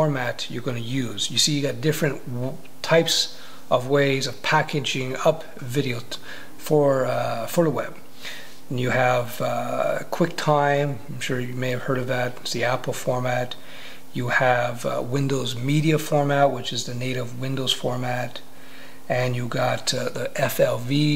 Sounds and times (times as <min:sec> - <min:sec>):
Speech: 0:00.0 - 0:08.0, 0:08.7 - 0:13.6, 0:14.2 - 0:18.5, 0:19.1 - 0:21.1
Inside, small room: 0:00.0 - 0:21.1.